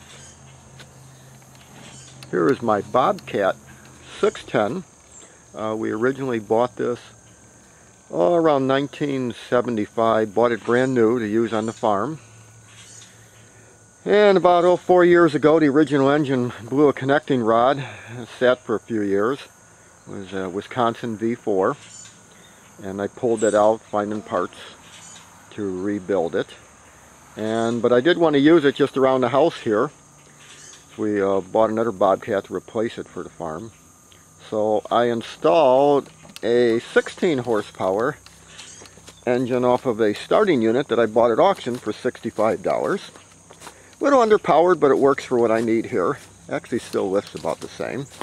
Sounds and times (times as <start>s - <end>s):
Speech: 2.3s - 4.9s, 5.6s - 7.2s, 8.1s - 12.2s, 14.1s - 19.5s, 20.1s - 21.8s, 22.8s - 24.8s, 25.5s - 26.6s, 27.4s - 30.0s, 31.0s - 33.7s, 34.4s - 38.2s, 39.2s - 43.2s, 44.0s - 48.2s.